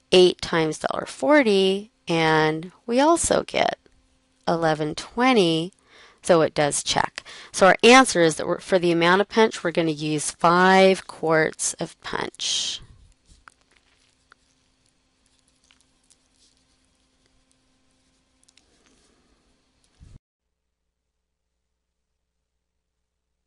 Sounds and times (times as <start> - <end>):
Speech: 0.2 - 3.8, 4.5 - 12.9.